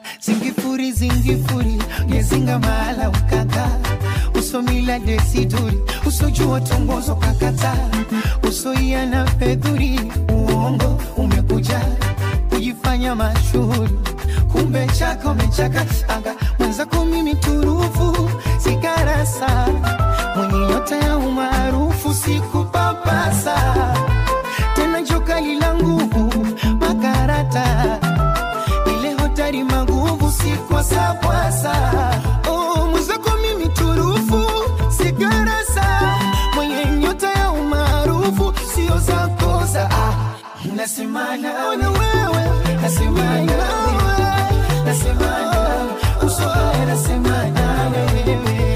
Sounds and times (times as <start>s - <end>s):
Music of Africa: 0.0s - 48.7s.